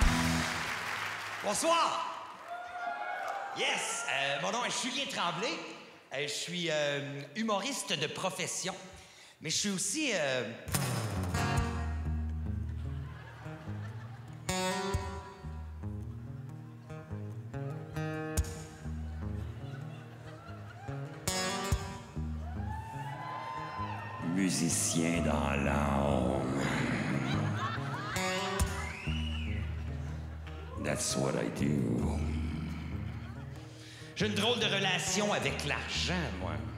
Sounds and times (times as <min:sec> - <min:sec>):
Music: 0:00.0 - 0:01.3, 0:10.7 - 0:36.7.